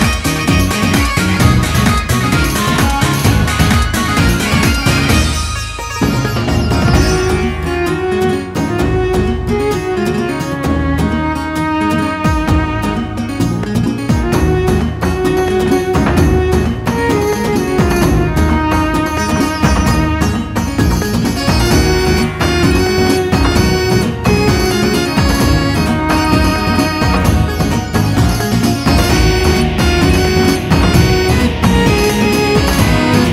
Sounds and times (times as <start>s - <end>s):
Music: 0.0s - 33.3s.